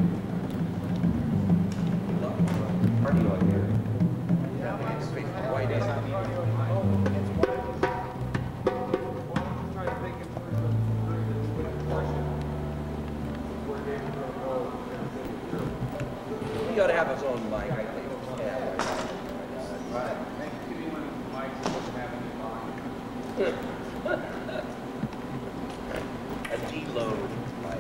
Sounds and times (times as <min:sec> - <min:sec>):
Speech: 0:02.2 - 0:03.8, 0:04.5 - 0:08.2, 0:09.0 - 0:12.7, 0:13.5 - 0:24.6, 0:26.4 - 0:27.8.